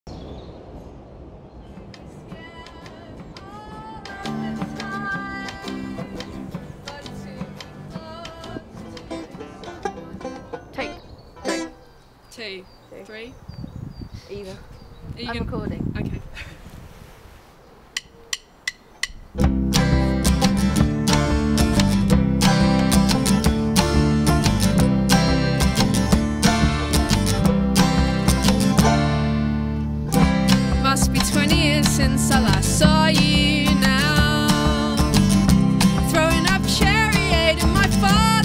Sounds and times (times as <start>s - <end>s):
Bluegrass: 1.9s - 12.0s, 19.4s - 38.4s
Banjo: 4.1s - 11.8s, 19.4s - 38.4s.